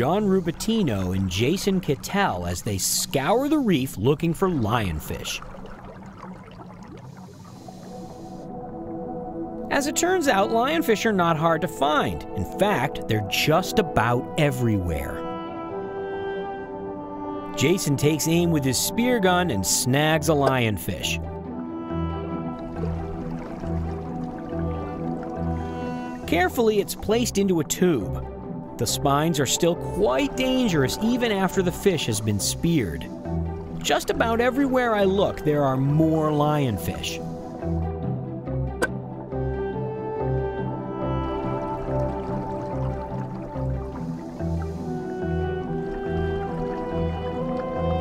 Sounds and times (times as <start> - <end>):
Speech: 0.0 - 5.4, 9.7 - 15.2, 17.6 - 21.2, 26.3 - 28.2, 28.8 - 33.1, 33.8 - 37.2
Music: 0.0 - 48.0.